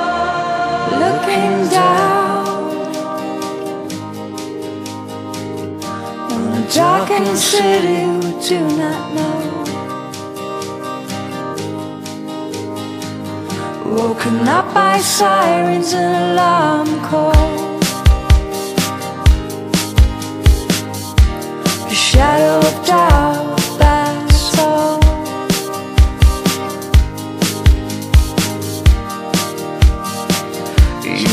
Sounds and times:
Music: 0.0 - 31.3.

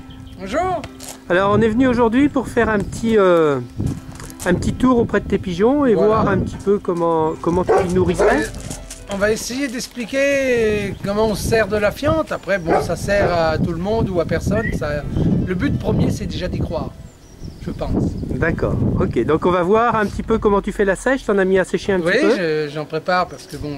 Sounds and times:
Speech: 4.4 - 16.9, 17.6 - 23.7.

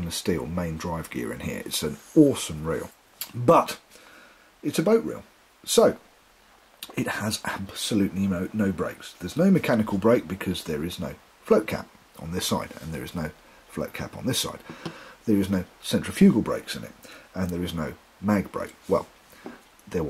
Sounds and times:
Speech: 0.0 - 3.8, 4.6 - 6.0, 6.8 - 19.1, 19.9 - 20.1.

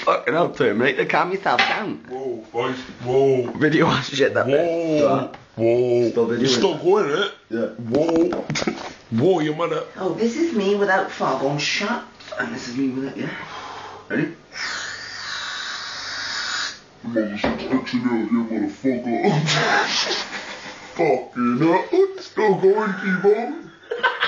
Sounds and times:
Inside, small room: 0.0 - 24.2.

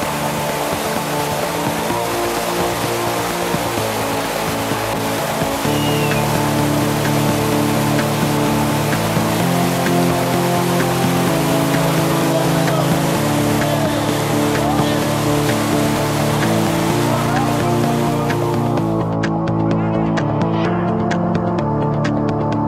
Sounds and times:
Music: 0.0 - 22.6.

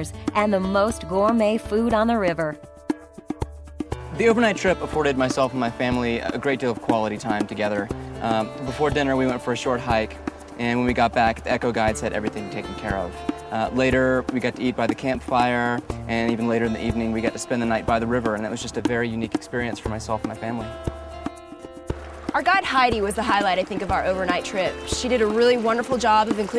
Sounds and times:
Speech: 0.0 - 2.6, 4.2 - 20.7, 22.4 - 26.5
Music: 0.0 - 26.5.

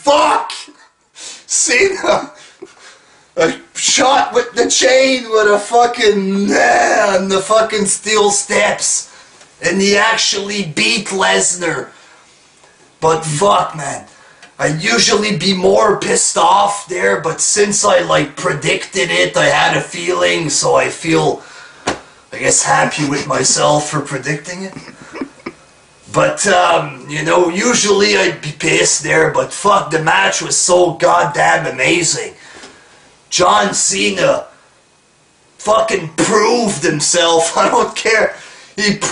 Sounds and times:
Speech: 0.0 - 2.4, 3.4 - 11.9, 13.0 - 21.4, 22.3 - 25.5, 26.1 - 32.4, 33.3 - 34.6, 35.6 - 39.1.

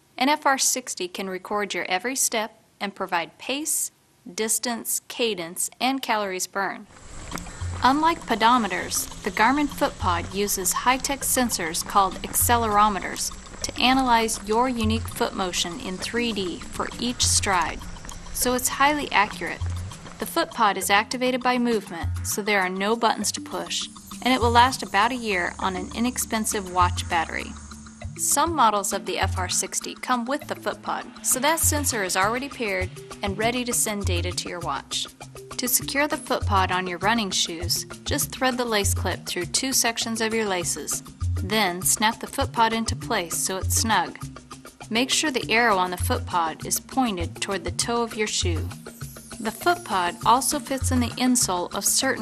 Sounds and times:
Speech: 0.2 - 6.8, 7.8 - 17.8, 18.4 - 19.6, 20.2 - 27.5, 28.2 - 44.2, 44.9 - 48.7, 49.4 - 52.2
Music: 6.9 - 52.2.

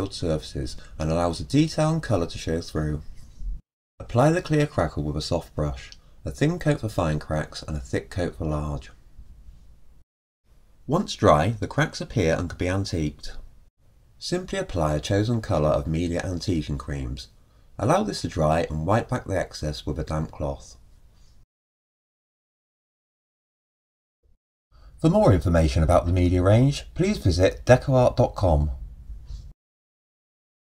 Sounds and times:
Speech: 0.0 - 3.1, 4.0 - 9.0, 10.9 - 13.5, 14.2 - 20.8, 25.0 - 28.8.

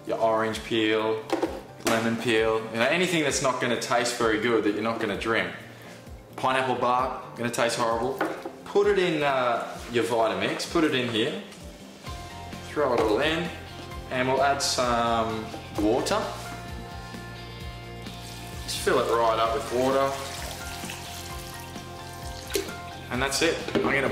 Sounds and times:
Water: 19.6 - 21.5.

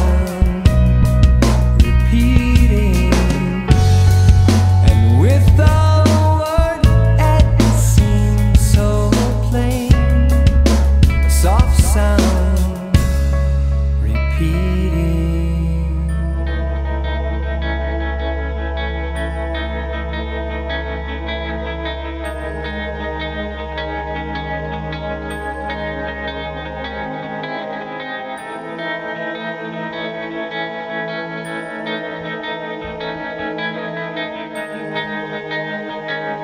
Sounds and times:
Music: 0.0 - 36.4.

